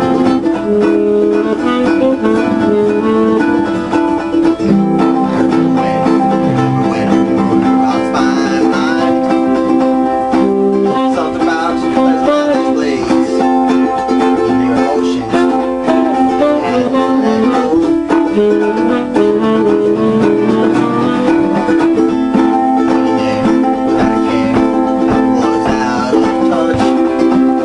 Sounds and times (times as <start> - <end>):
Strum: 0.0 - 27.6.